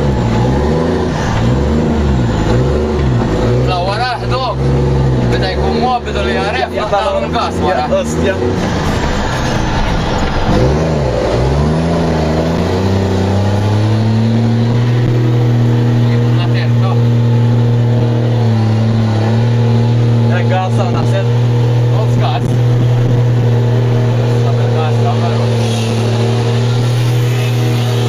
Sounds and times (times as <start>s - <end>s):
Speech: 3.7s - 4.6s, 5.3s - 8.5s, 16.0s - 17.1s, 20.3s - 21.3s, 24.4s - 25.7s.